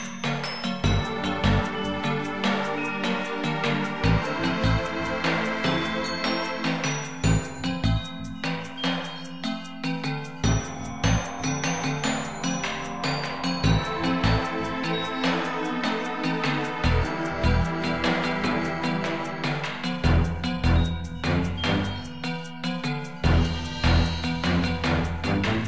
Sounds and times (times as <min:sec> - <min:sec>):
Background music: 0:00.0 - 0:25.6.